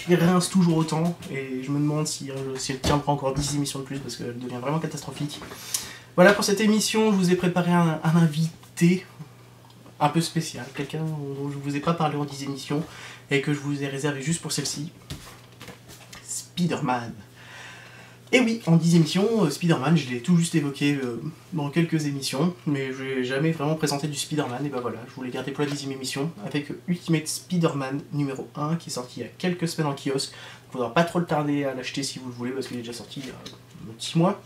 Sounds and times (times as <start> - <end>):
Speech: 0.0 - 5.5, 6.2 - 9.3, 10.0 - 15.0, 16.2 - 17.3, 18.3 - 34.4.